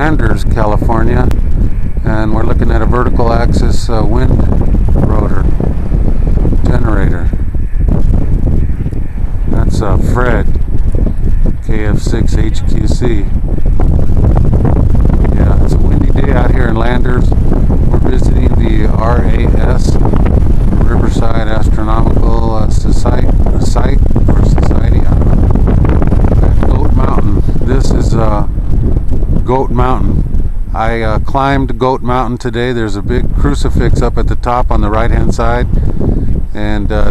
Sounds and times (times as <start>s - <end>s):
Speech: 0.0s - 1.4s, 2.0s - 5.5s, 6.6s - 7.3s, 9.6s - 10.6s, 11.6s - 13.3s, 15.3s - 17.3s, 18.0s - 20.0s, 20.8s - 25.2s, 26.7s - 28.5s, 29.4s - 30.2s, 30.8s - 35.8s, 36.5s - 37.1s.